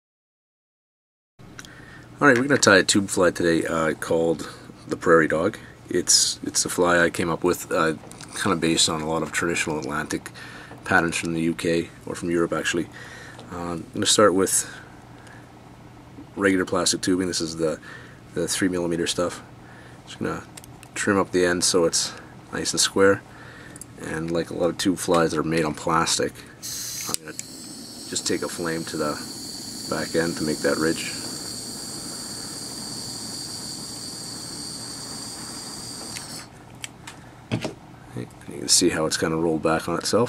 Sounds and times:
Speech: 2.2 - 12.9, 13.5 - 14.8, 16.3 - 17.8, 18.4 - 19.5, 20.1 - 23.2, 24.0 - 26.5, 28.1 - 29.2, 29.9 - 31.2, 38.1 - 40.2.

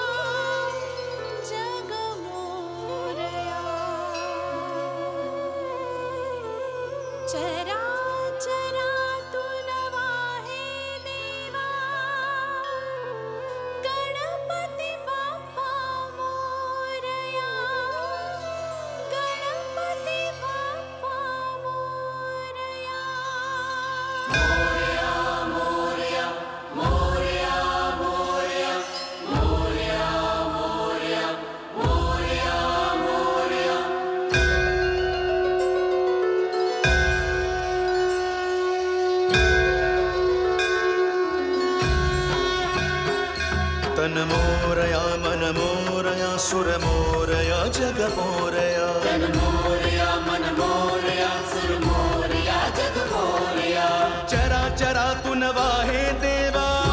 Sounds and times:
Singing: 0.0 - 34.9, 39.1 - 56.9
Sitar: 0.0 - 56.9.

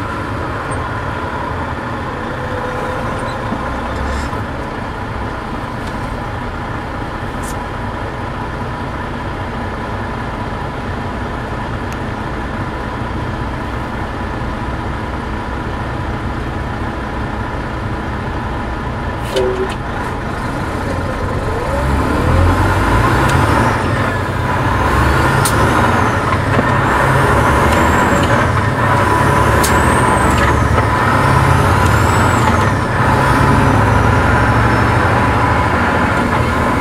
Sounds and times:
Truck: 0.0 - 36.8.

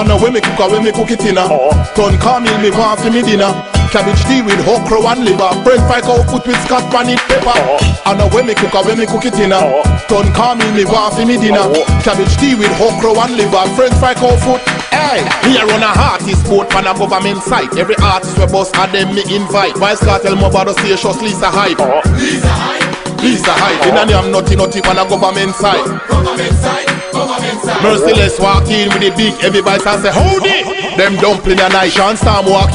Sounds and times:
Pop music: 0.0 - 32.7.

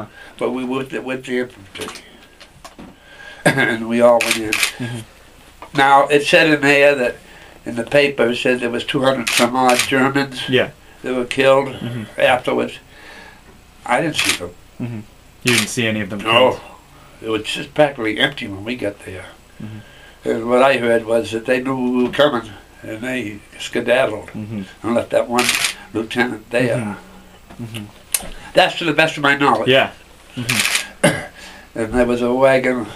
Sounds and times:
Speech: 0.0 - 2.1, 3.5 - 5.1, 5.7 - 12.8, 13.8 - 27.0, 28.6 - 30.6, 31.8 - 32.9.

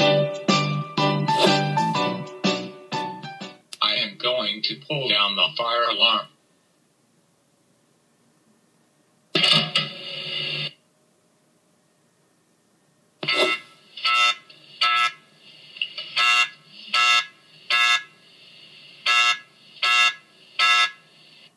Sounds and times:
Buzzer: 13.2 - 15.2, 16.2 - 18.2, 19.1 - 21.1.

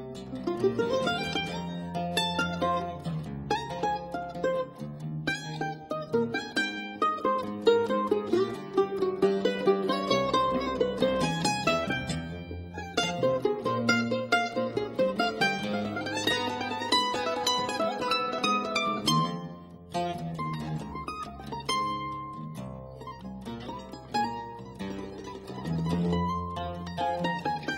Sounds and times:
Guitar: 0.0 - 27.7
Mandolin: 0.0 - 27.7.

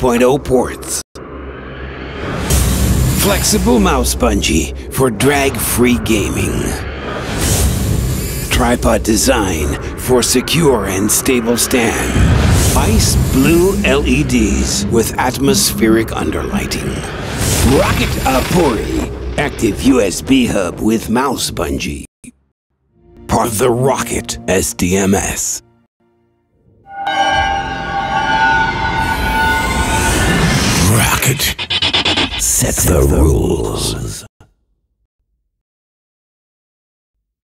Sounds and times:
Speech: 0.0 - 1.0, 3.2 - 6.8, 8.5 - 22.4, 23.3 - 25.6, 30.8 - 31.6, 32.4 - 34.4
Music: 2.5 - 20.1, 22.8 - 30.5.

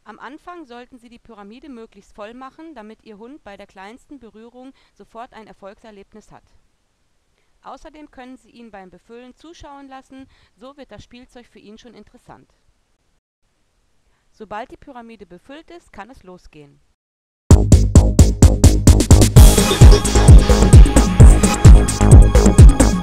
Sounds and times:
Speech: 0.0 - 6.6, 7.6 - 12.6, 14.3 - 16.8
Music: 17.5 - 23.0.

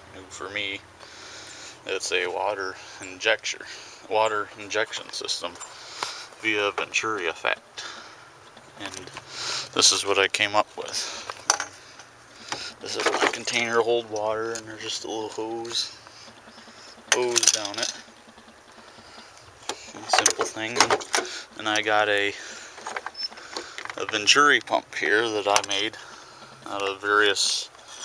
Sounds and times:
Speech: 0.1 - 0.8, 1.9 - 5.6, 6.4 - 7.6, 8.8 - 9.2, 9.8 - 11.2, 12.8 - 16.0, 17.1 - 18.0, 20.0 - 21.0, 21.6 - 22.5, 24.0 - 26.0, 26.7 - 27.7.

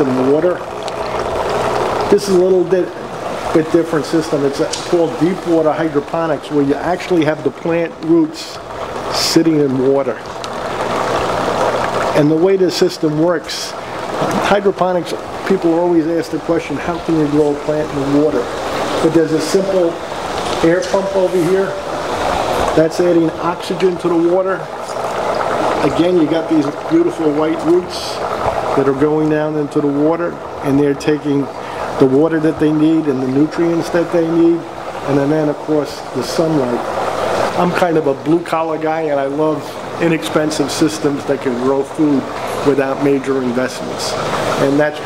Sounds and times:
Trickle, dribble: 0.0 - 45.0.

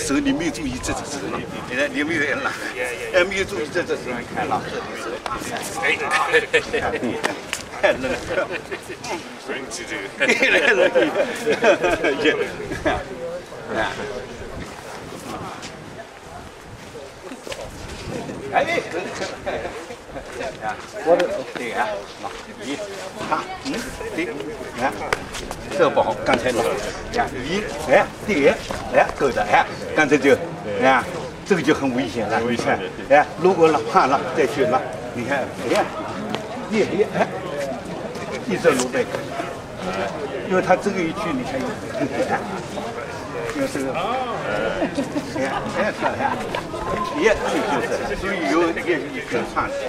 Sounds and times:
Speech: 0.0 - 49.8.

